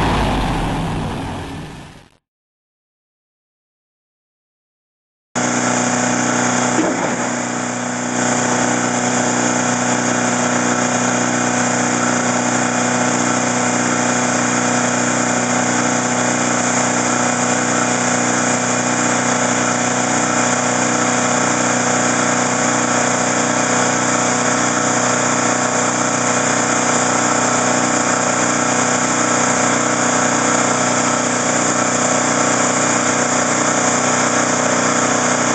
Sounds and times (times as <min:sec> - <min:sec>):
Vehicle: 0:00.0 - 0:02.2, 0:05.4 - 0:35.5.